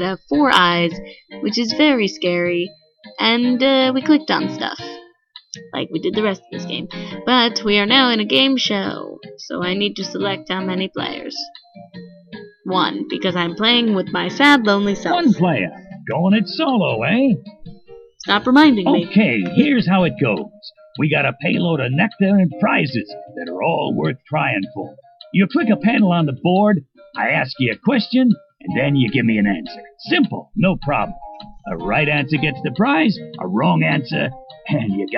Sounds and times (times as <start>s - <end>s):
Speech: 0.0s - 5.0s, 5.6s - 11.5s, 12.7s - 17.4s, 18.2s - 31.1s, 31.7s - 35.1s
Music: 0.0s - 35.1s.